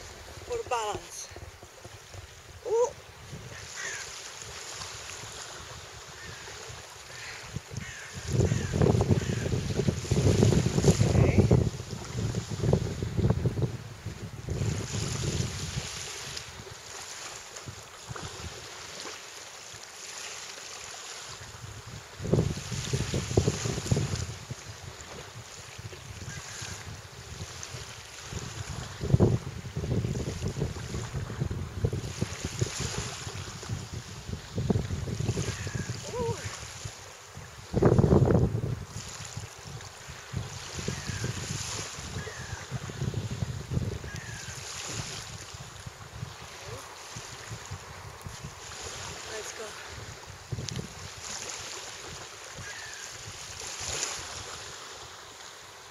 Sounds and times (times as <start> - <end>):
Outside, rural or natural: 0.0 - 55.9
Speech: 0.5 - 1.4, 11.0 - 11.5, 36.1 - 36.5, 49.3 - 49.8.